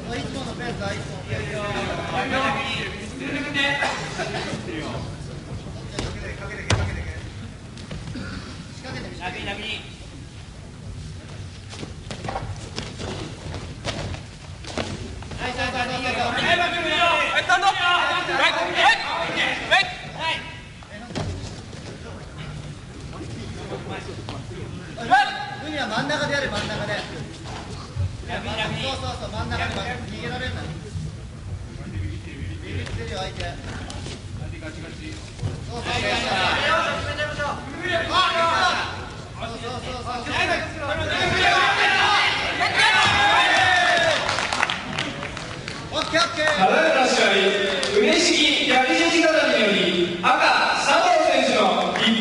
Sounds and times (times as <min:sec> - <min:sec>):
Inside, public space: 0:00.0 - 0:52.2.